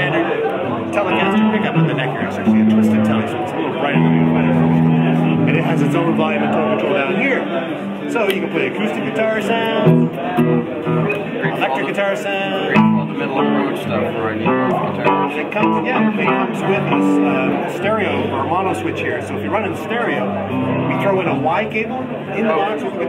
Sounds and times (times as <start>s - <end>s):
Electric guitar: 0.0s - 8.4s, 9.4s - 11.8s, 12.5s - 23.0s
Speech: 0.0s - 23.0s.